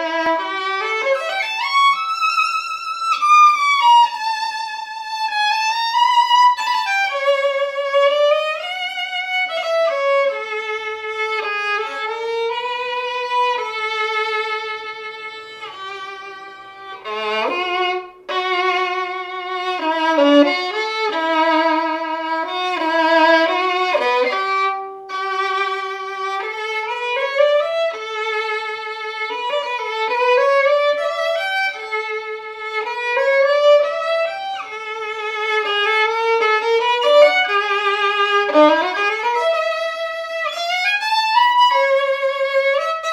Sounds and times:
Violin, fiddle: 0.0s - 43.1s.

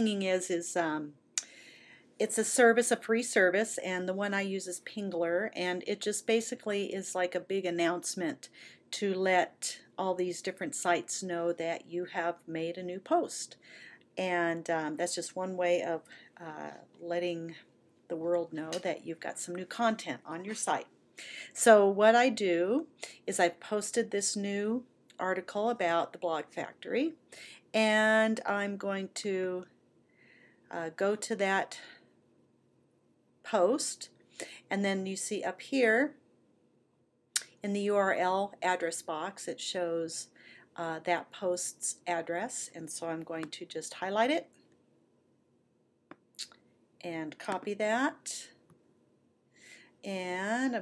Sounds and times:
Speech: 0.0s - 1.1s, 2.2s - 13.6s, 14.2s - 20.8s, 21.5s - 27.2s, 27.8s - 29.7s, 30.7s - 31.9s, 33.5s - 34.1s, 34.7s - 36.2s, 37.4s - 44.5s, 47.0s - 48.6s, 50.1s - 50.8s.

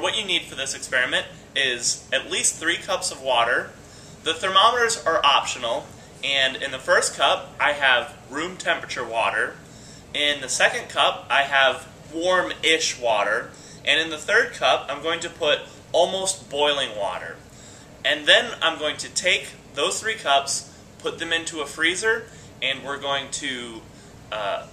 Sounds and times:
Speech: 0.0s - 9.6s, 10.2s - 17.4s, 18.1s - 24.7s.

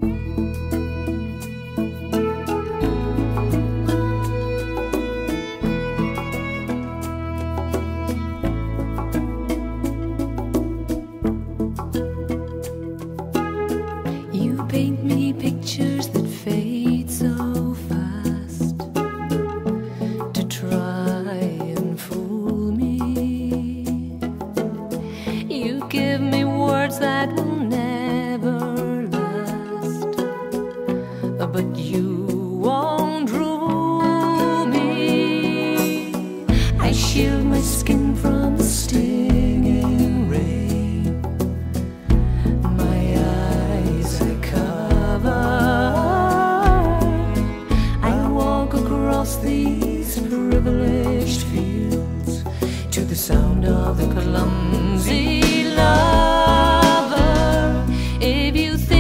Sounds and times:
Music: 0.0s - 59.0s.

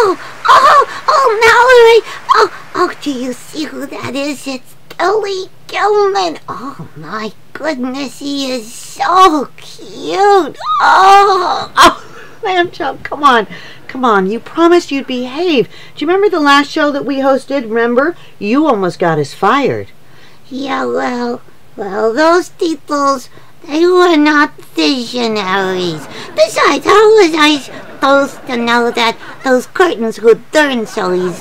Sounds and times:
Speech: 0.0s - 31.4s.

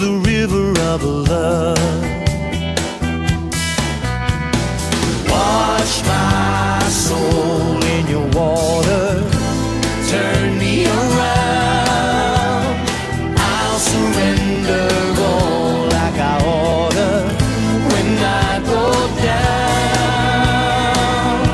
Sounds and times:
Music: 0.0s - 21.5s.

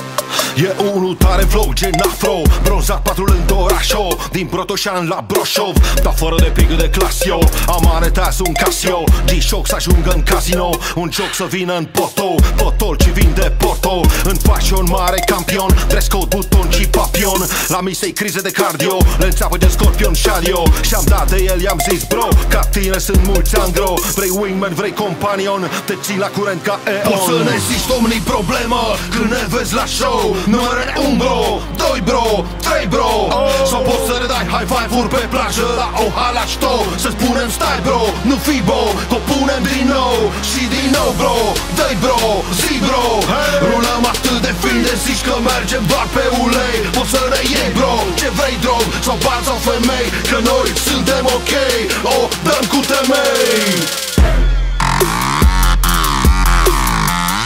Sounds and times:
Music: 0.0s - 57.4s.

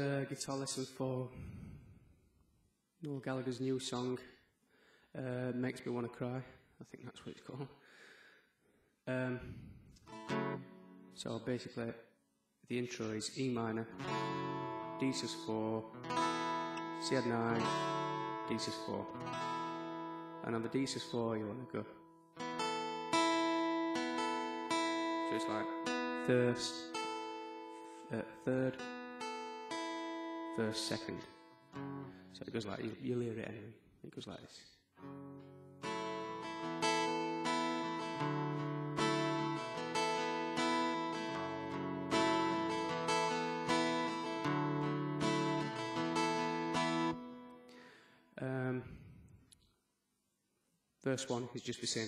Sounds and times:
Speech: 0.0s - 1.4s, 3.0s - 4.4s, 5.2s - 7.8s, 9.1s - 9.6s, 11.2s - 12.1s, 12.7s - 14.0s, 15.0s - 15.9s, 17.0s - 17.7s, 18.5s - 19.2s, 20.4s - 22.0s, 25.3s - 25.7s, 26.3s - 26.9s, 28.1s - 28.8s, 30.6s - 31.3s, 32.4s - 34.8s, 48.4s - 49.0s, 51.0s - 52.0s
Acoustic guitar: 9.9s - 11.2s, 13.8s - 32.4s, 35.0s - 48.6s.

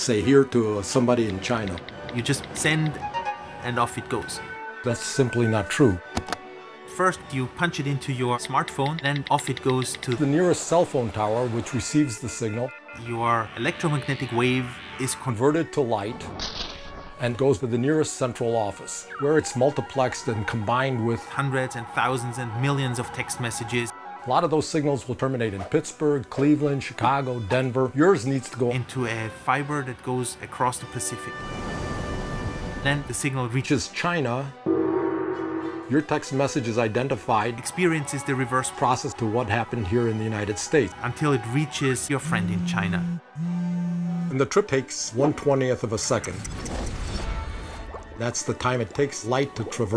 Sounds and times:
Speech: 0.0s - 3.0s, 3.6s - 6.0s, 6.9s - 16.3s, 17.2s - 31.4s, 32.8s - 34.6s, 35.9s - 43.2s, 44.3s - 46.5s, 48.2s - 49.9s
Music: 0.0s - 49.9s.

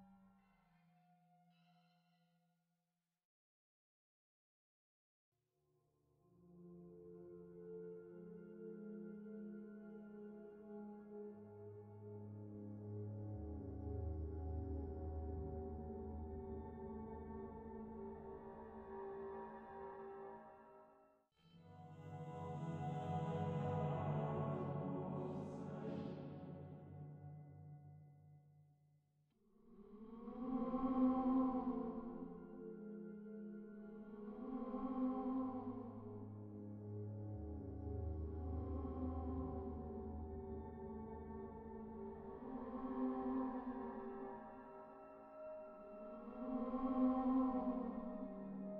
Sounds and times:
Music: 0.0s - 2.6s, 5.8s - 28.7s, 29.4s - 48.7s.

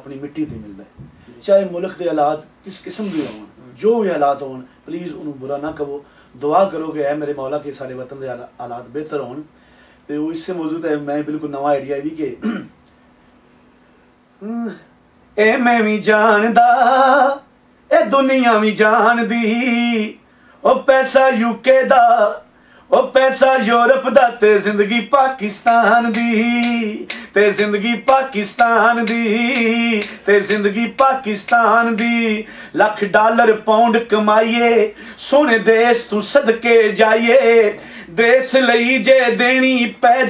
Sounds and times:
Male singing: 15.4s - 40.2s.

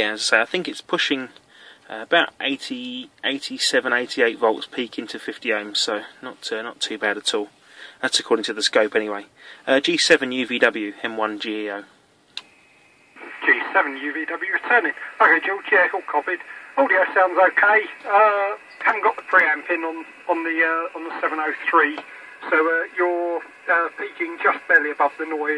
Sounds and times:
Speech: 0.0s - 11.9s, 13.2s - 25.5s
Radio: 12.4s - 25.5s.

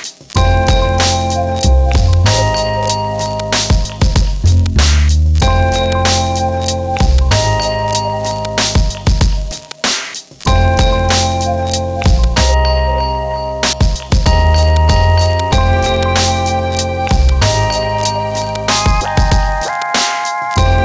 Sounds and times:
Music: 0.0s - 20.8s.

